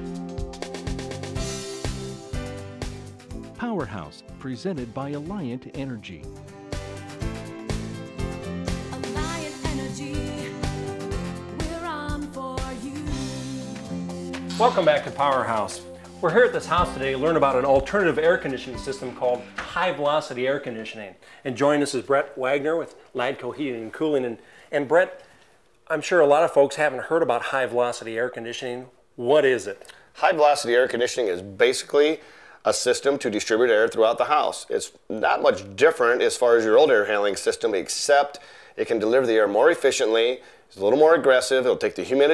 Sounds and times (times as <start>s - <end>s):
Music: 0.0s - 20.8s
Speech: 3.6s - 6.3s, 14.6s - 25.2s, 25.9s - 42.3s.